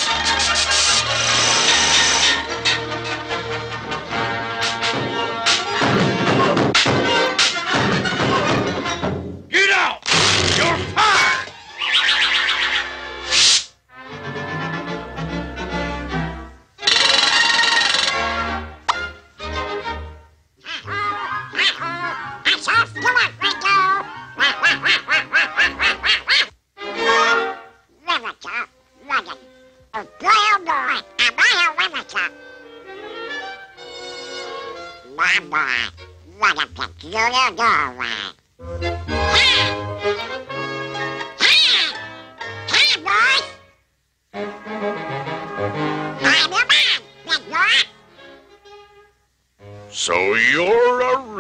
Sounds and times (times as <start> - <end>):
Music: 0.0 - 9.5, 10.6 - 27.9, 28.7 - 37.8, 38.5 - 51.4
Speech: 9.5 - 10.0, 10.6 - 11.4, 21.6 - 24.1, 28.0 - 32.4, 35.1 - 38.4, 42.7 - 43.5, 46.2 - 47.9, 50.0 - 51.4.